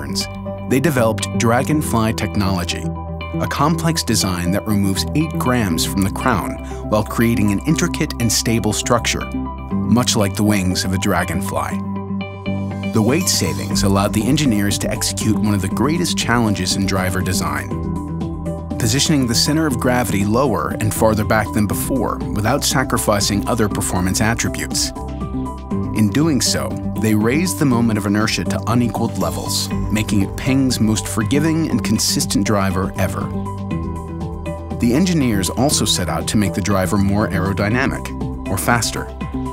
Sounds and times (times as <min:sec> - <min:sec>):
Speech: 0:00.0 - 0:11.8, 0:12.9 - 0:17.8, 0:18.8 - 0:25.0, 0:25.9 - 0:33.4, 0:34.8 - 0:39.2
Music: 0:00.0 - 0:39.5.